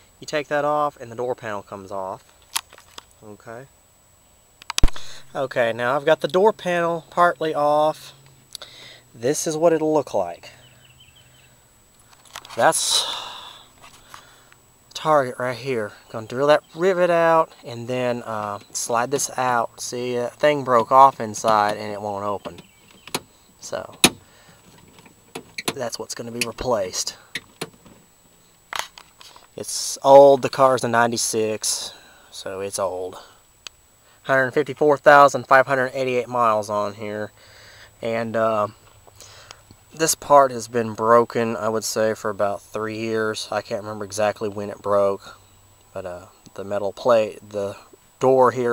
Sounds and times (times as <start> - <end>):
Speech: 0.2 - 2.2, 3.2 - 3.7, 5.3 - 8.2, 9.2 - 10.6, 12.5 - 13.2, 14.9 - 22.6, 23.6 - 24.0, 25.7 - 27.2, 29.6 - 33.4, 34.2 - 37.3, 38.0 - 38.8, 40.0 - 45.4, 46.0 - 48.7.